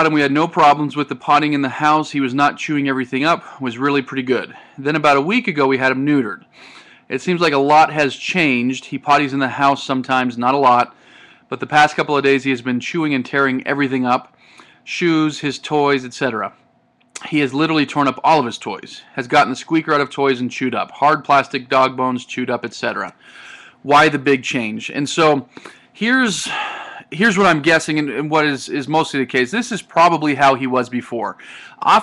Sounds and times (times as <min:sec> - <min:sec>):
Speech: 0:00.0 - 0:06.4, 0:07.1 - 0:10.9, 0:11.5 - 0:14.3, 0:14.9 - 0:16.6, 0:17.2 - 0:23.2, 0:23.8 - 0:32.0.